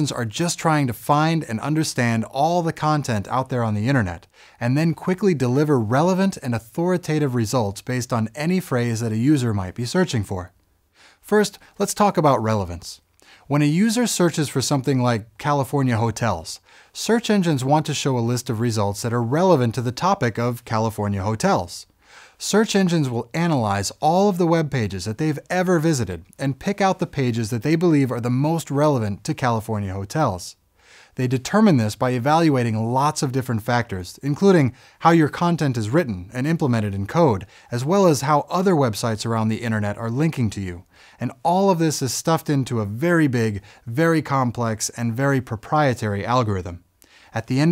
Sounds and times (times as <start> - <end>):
Speech: 0.0 - 10.6, 11.2 - 30.6, 31.2 - 47.7.